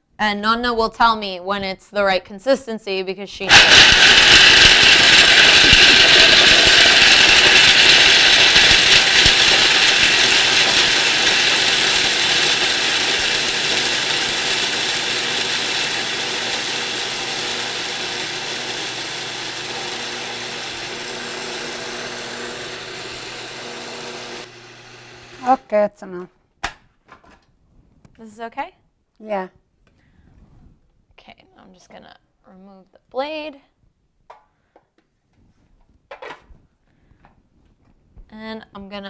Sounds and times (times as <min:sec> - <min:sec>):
Speech: 0:00.2 - 0:03.5, 0:25.4 - 0:26.3, 0:28.2 - 0:29.6, 0:31.2 - 0:33.7, 0:38.3 - 0:39.0
Blender: 0:03.5 - 0:25.6.